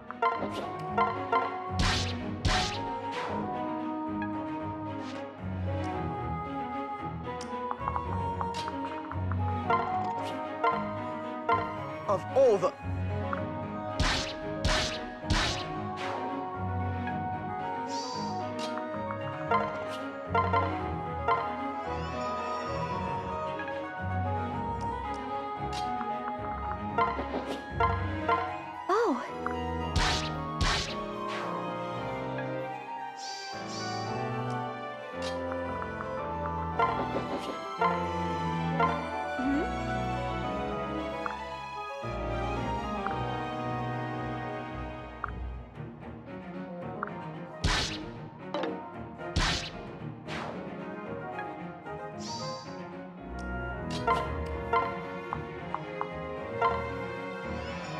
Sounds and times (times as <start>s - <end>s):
Music: 0.0s - 57.9s
Speech: 12.1s - 12.8s, 28.9s - 29.3s.